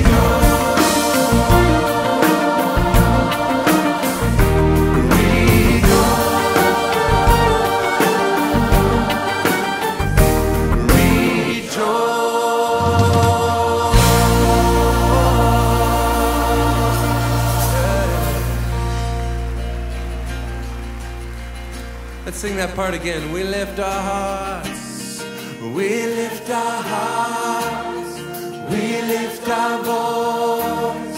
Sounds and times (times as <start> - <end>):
Choir: 0.0 - 20.6, 25.5 - 31.1
Gospel music: 0.0 - 31.1.